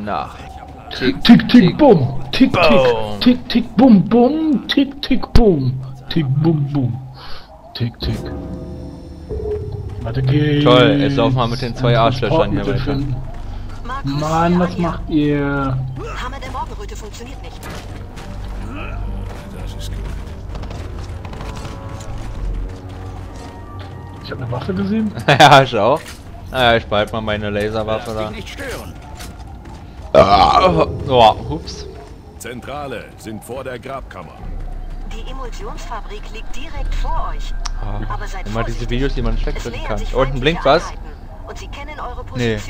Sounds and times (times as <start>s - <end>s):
Music: 0.0s - 42.7s.